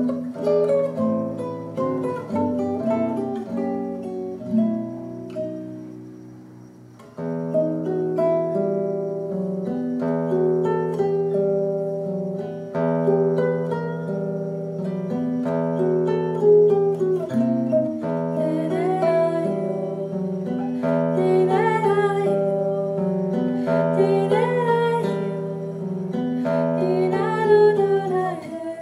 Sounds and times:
Guitar: 0:00.0 - 0:28.8.

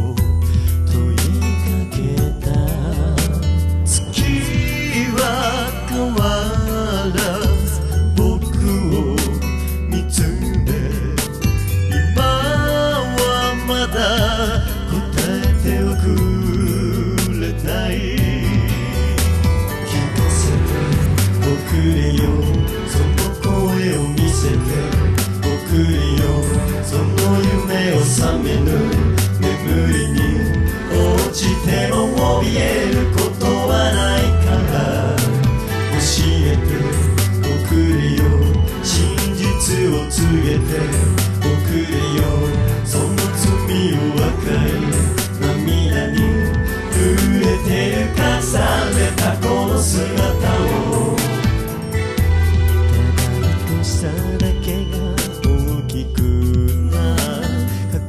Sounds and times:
Music: 0:00.0 - 0:58.0.

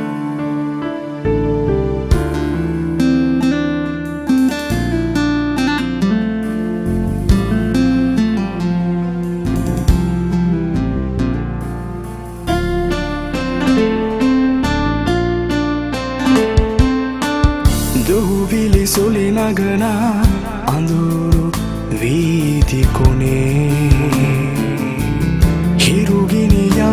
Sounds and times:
Soundtrack music: 0:00.0 - 0:26.9.

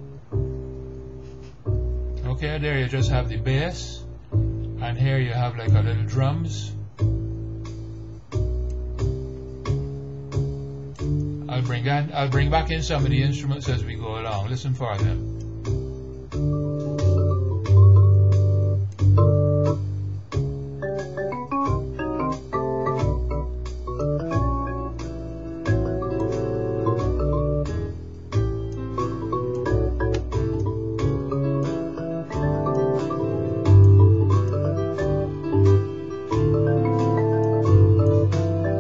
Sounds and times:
Inside, small room: 0:00.0 - 0:38.8
Music: 0:00.0 - 0:38.8.

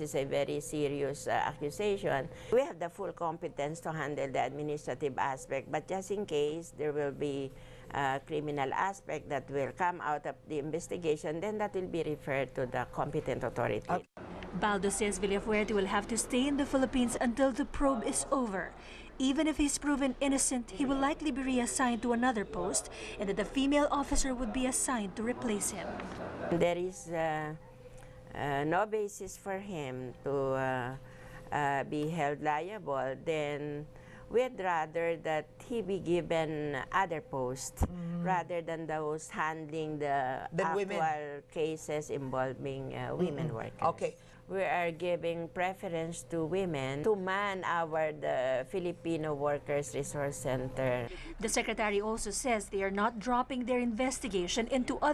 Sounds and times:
Speech: 0:00.0 - 0:27.6, 0:31.6 - 0:55.1.

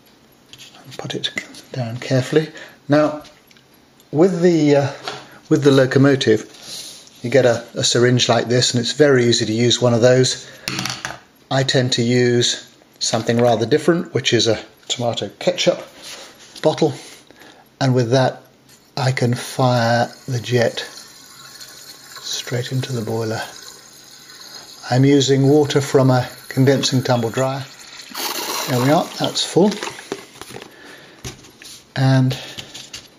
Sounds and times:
Speech: 0:00.7 - 0:03.3, 0:04.1 - 0:06.5, 0:07.2 - 0:10.4, 0:11.5 - 0:15.9, 0:16.6 - 0:17.1, 0:17.8 - 0:18.4, 0:19.0 - 0:21.0, 0:22.2 - 0:23.6, 0:24.8 - 0:27.7, 0:28.7 - 0:29.9, 0:32.0 - 0:32.5.

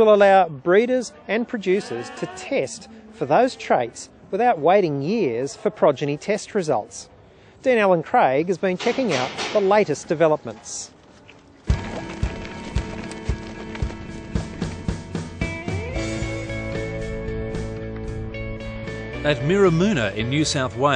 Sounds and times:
Speech: 0:00.0 - 0:11.0, 0:19.3 - 0:20.9
Music: 0:11.7 - 0:20.9.

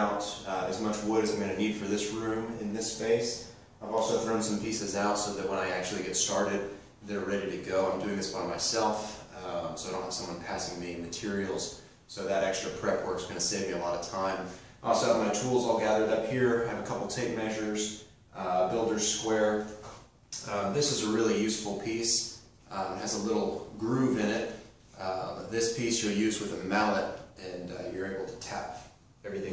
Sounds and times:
Speech: 0:00.0 - 0:29.5.

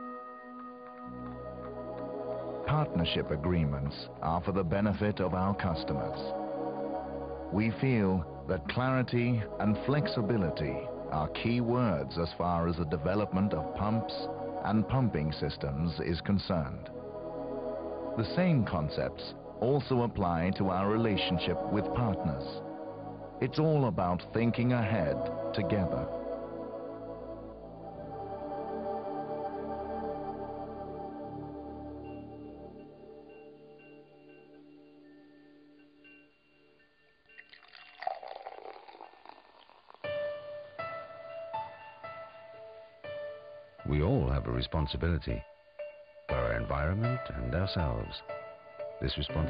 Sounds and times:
Music: 0:00.0 - 0:49.4
Speech: 0:02.7 - 0:06.3, 0:07.6 - 0:16.9, 0:18.2 - 0:22.6, 0:23.4 - 0:26.1, 0:43.8 - 0:45.5, 0:46.3 - 0:48.3, 0:49.0 - 0:49.4.

